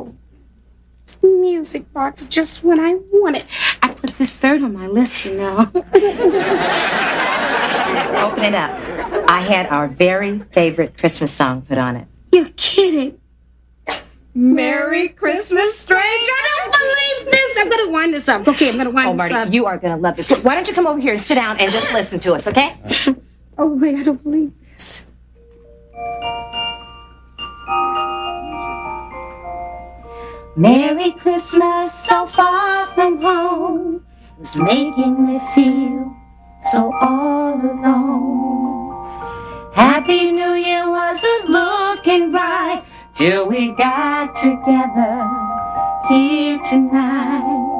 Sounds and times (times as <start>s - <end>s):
Marimba, xylophone: 25.4s - 30.5s
Glockenspiel: 25.4s - 47.7s.